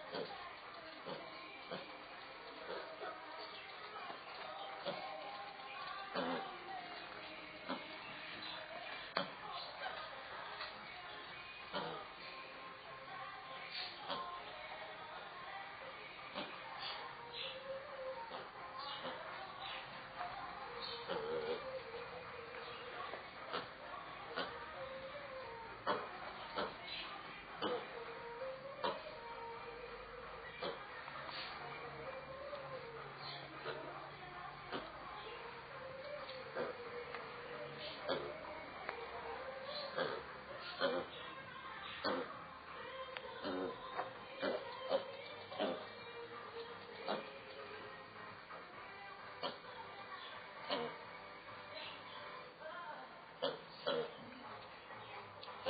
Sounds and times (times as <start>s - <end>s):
Mouse: 0.0s - 47.9s, 49.3s - 51.0s, 53.4s - 55.7s
Music: 0.0s - 55.7s.